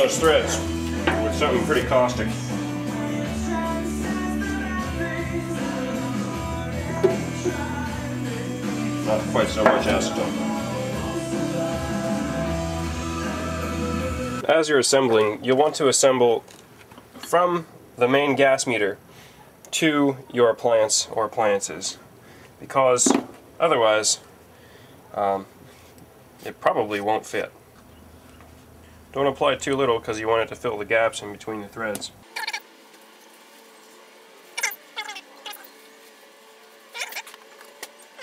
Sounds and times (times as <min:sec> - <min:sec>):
Speech: 0:00.0 - 0:02.4, 0:09.1 - 0:10.4, 0:14.4 - 0:16.5, 0:17.3 - 0:19.0, 0:19.7 - 0:22.0, 0:22.6 - 0:24.3, 0:25.1 - 0:25.5, 0:26.4 - 0:27.6, 0:29.2 - 0:32.2.